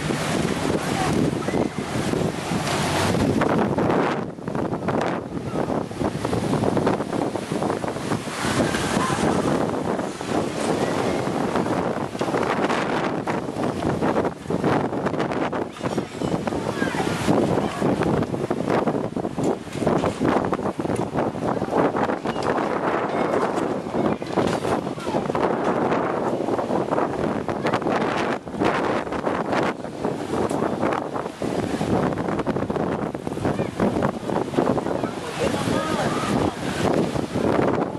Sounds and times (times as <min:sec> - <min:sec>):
Wind noise (microphone): 0:00.0 - 0:37.9.